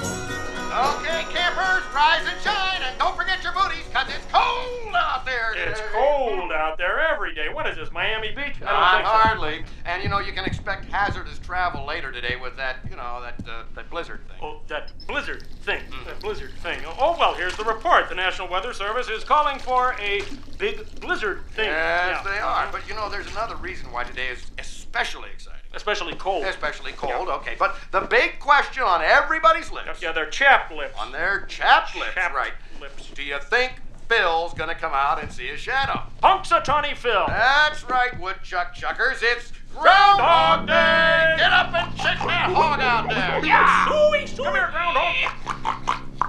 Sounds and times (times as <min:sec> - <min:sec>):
Speech: 0:00.7 - 0:45.6
Radio: 0:00.8 - 0:16.6, 0:40.2 - 0:45.4.